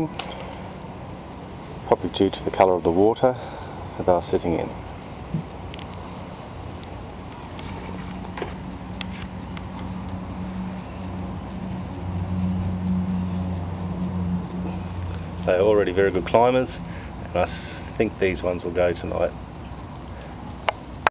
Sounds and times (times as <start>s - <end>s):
Speech: 1.9s - 3.4s, 4.0s - 4.8s, 15.5s - 16.8s, 17.4s - 19.4s.